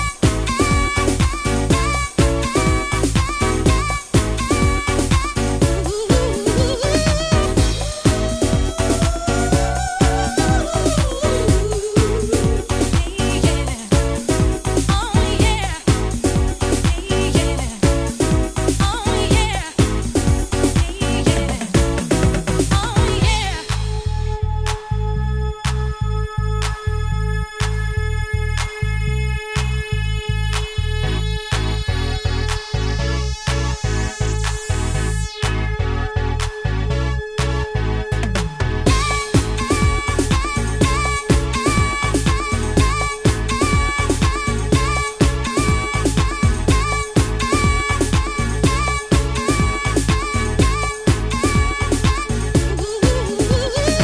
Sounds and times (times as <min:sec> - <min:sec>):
Electronic music: 0:00.0 - 0:54.0.